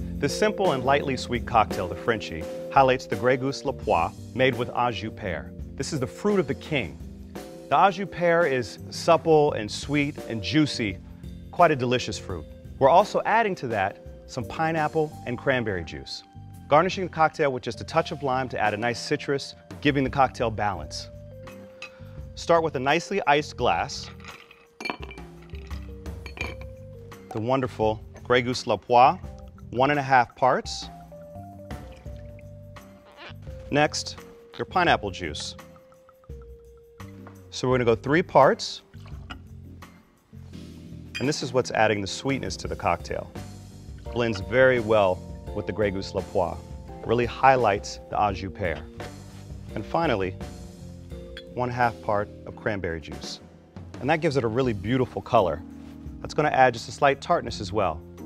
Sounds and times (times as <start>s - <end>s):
Music: 0.0s - 58.2s
Speech: 0.2s - 7.0s, 7.7s - 11.0s, 11.6s - 21.1s, 22.4s - 24.1s, 27.3s - 30.9s, 33.7s - 35.6s, 37.5s - 38.8s, 41.2s - 43.3s, 44.1s - 48.9s, 49.7s - 50.4s, 51.5s - 53.4s, 54.0s - 55.6s, 56.2s - 58.0s.